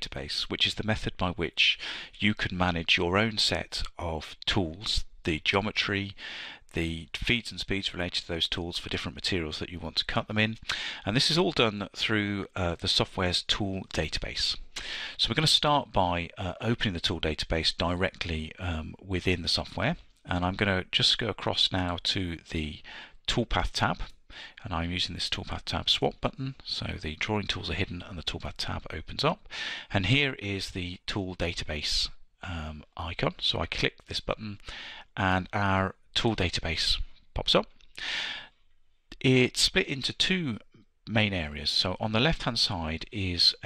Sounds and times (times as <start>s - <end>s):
Speech: 0.0s - 34.6s, 35.2s - 37.7s, 39.2s - 43.6s.